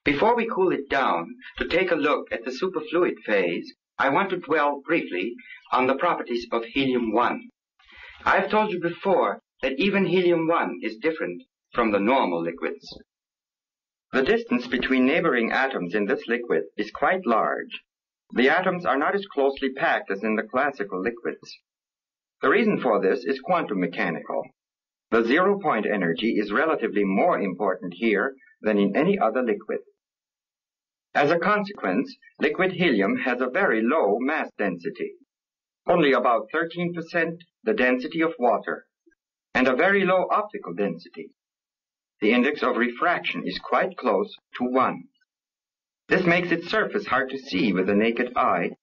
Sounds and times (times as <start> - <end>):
Speech: 0.0 - 7.6, 8.2 - 13.1, 14.1 - 21.7, 22.4 - 30.0, 31.2 - 35.2, 35.8 - 38.9, 39.6 - 41.4, 42.2 - 45.2, 46.1 - 48.8.